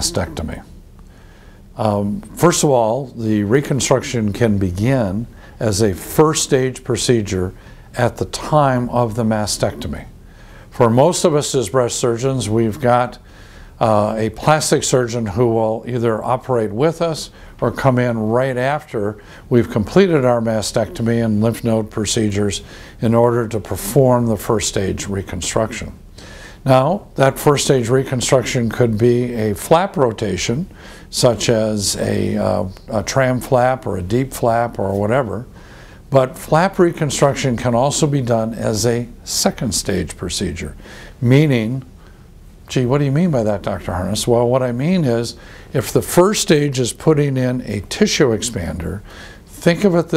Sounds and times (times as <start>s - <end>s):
Speech: 0.0s - 0.8s, 1.8s - 26.0s, 26.6s - 35.5s, 36.1s - 41.9s, 42.7s - 50.1s.